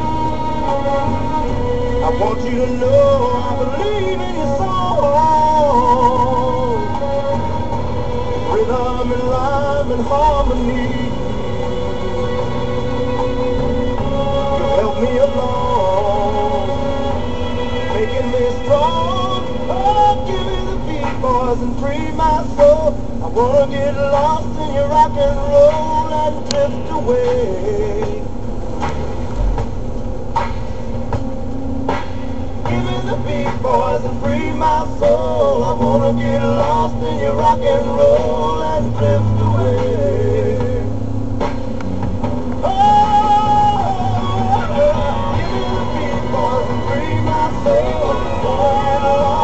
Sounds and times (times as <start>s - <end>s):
Music: 0.0s - 49.4s
Vehicle: 0.0s - 49.4s.